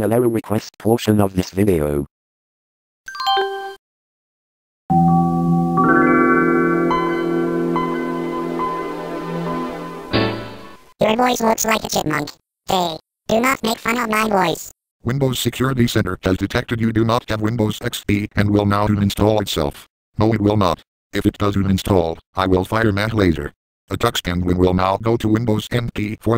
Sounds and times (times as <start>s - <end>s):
Speech: 0.0s - 2.1s, 11.0s - 26.3s
Music: 4.9s - 10.9s.